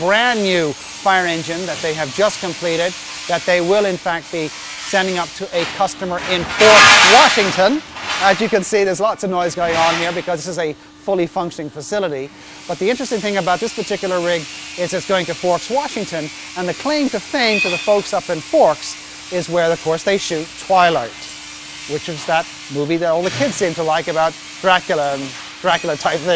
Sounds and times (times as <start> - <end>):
Speech: 0.0 - 21.2, 21.9 - 26.3.